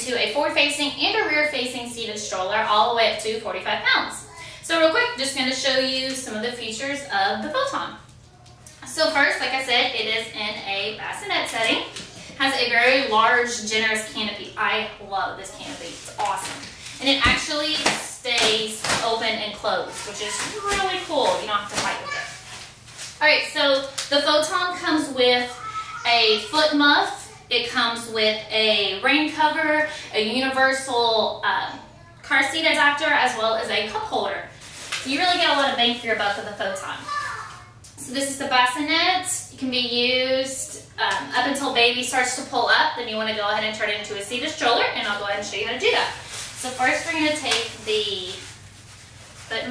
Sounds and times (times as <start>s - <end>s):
Speech: 0.0s - 8.1s, 8.8s - 22.4s, 23.2s - 48.5s, 49.5s - 49.7s.